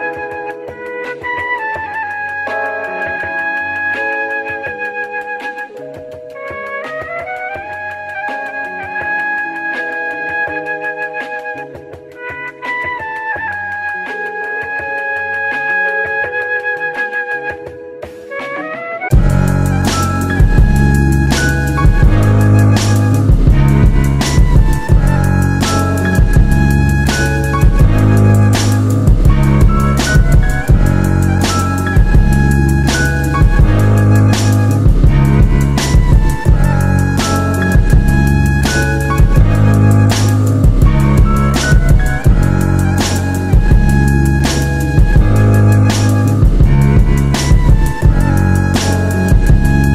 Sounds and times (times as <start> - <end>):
Theme music: 18.0 - 49.9.